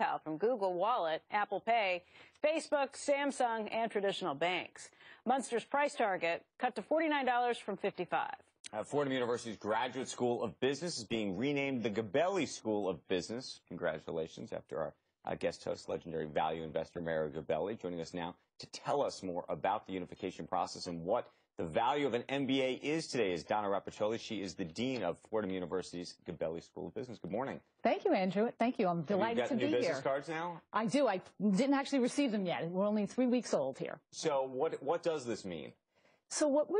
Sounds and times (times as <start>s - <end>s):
Speech: 8.7s - 35.7s.